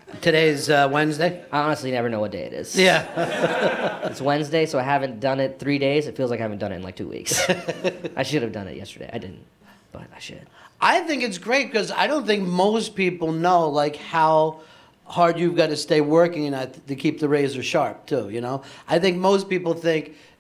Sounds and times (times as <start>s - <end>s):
Speech: 8.2s - 20.1s.